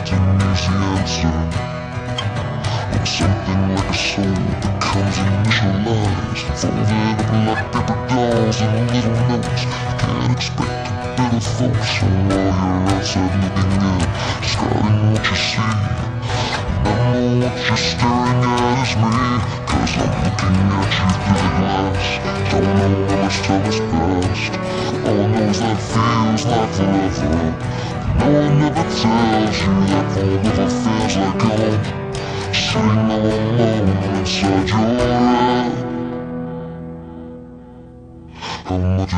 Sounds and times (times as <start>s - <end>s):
Music: 0.0s - 39.1s.